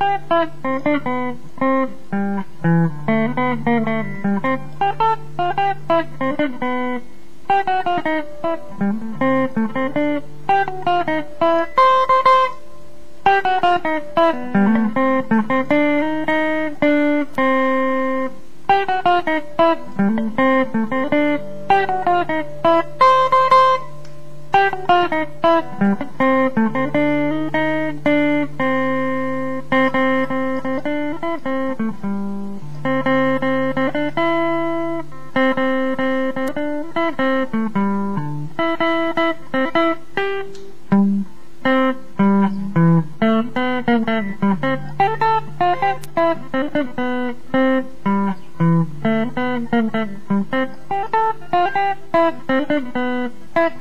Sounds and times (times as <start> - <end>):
Strum: 0.0 - 53.8.